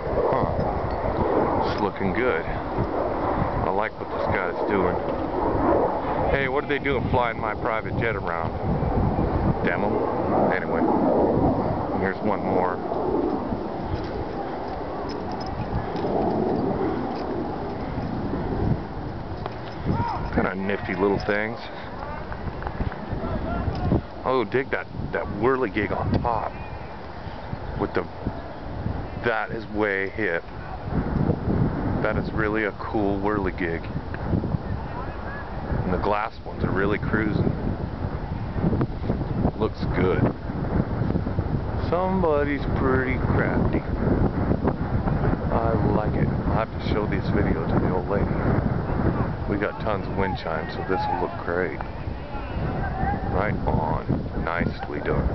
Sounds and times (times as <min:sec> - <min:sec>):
Wind: 0:00.0 - 0:55.3.